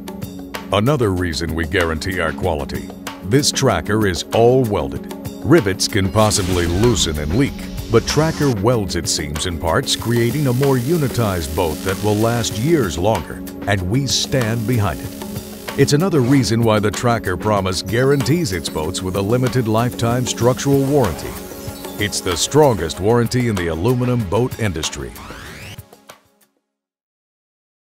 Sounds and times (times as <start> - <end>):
Music: 0.0 - 26.9
Speech: 0.7 - 15.1, 15.8 - 21.4, 22.0 - 25.2.